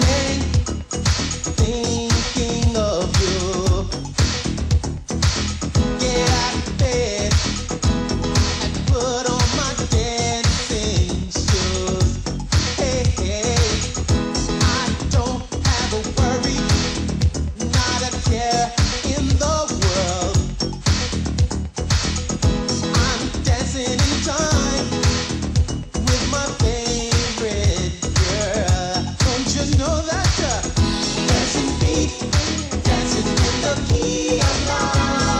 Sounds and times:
Singing: 0.0s - 0.6s, 6.0s - 7.5s, 14.6s - 16.9s, 26.1s - 35.3s.

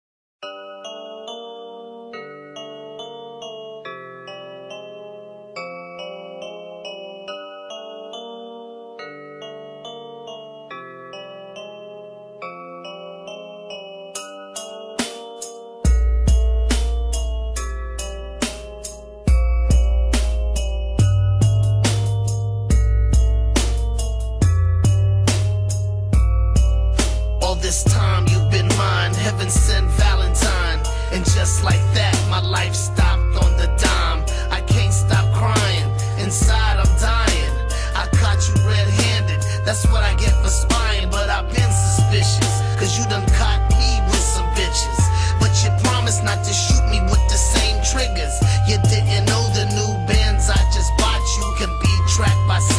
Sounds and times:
Music: 0.4s - 52.7s.

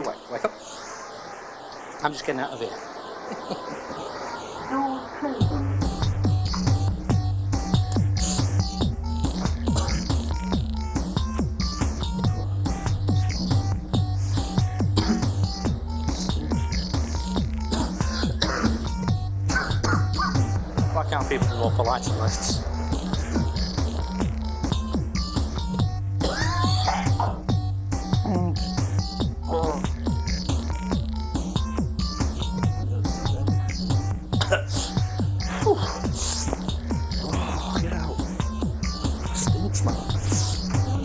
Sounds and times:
Music: 3.5s - 41.0s.

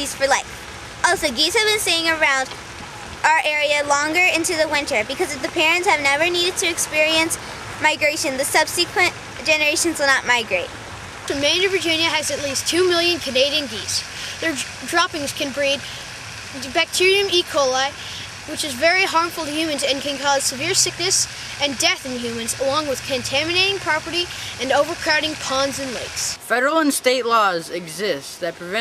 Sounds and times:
Speech: 0.0s - 0.5s, 1.1s - 2.6s, 3.3s - 10.7s, 11.3s - 16.0s, 16.6s - 28.8s.

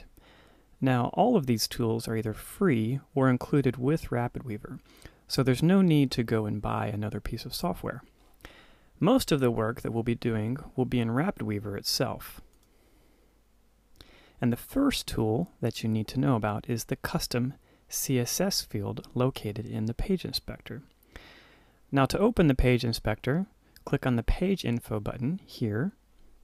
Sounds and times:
Speech: 0.8s - 8.1s, 9.0s - 12.5s, 14.4s - 20.9s, 21.9s - 26.0s.

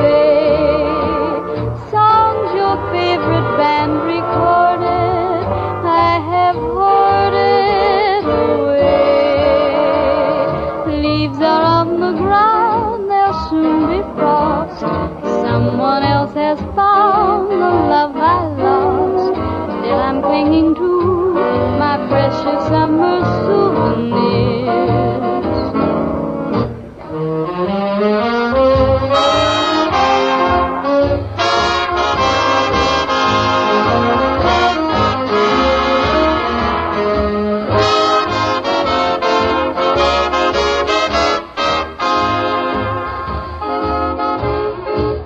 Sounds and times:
Music: 0.0s - 45.2s.

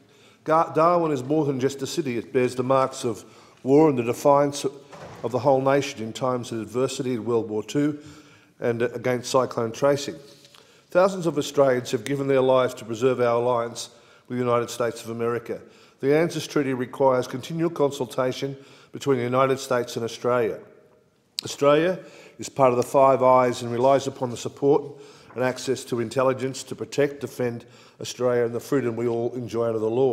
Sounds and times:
Narration, monologue: 0.0s - 30.1s
Male speech, man speaking: 0.5s - 8.0s, 8.6s - 10.2s, 11.0s - 20.7s, 21.4s - 30.1s.

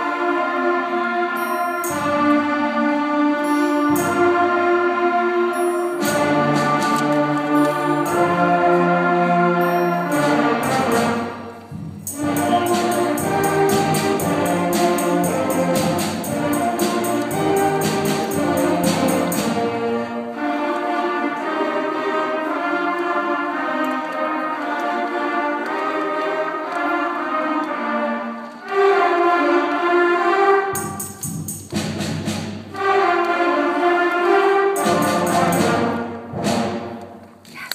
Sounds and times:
Classical music: 0.0s - 37.5s
Orchestra: 0.0s - 37.7s.

